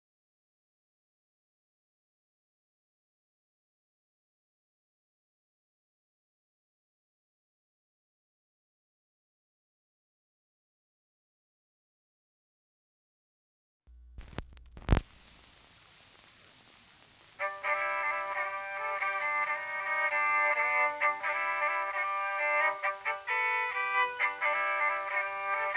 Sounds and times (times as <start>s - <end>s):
Music: 17.4s - 25.7s.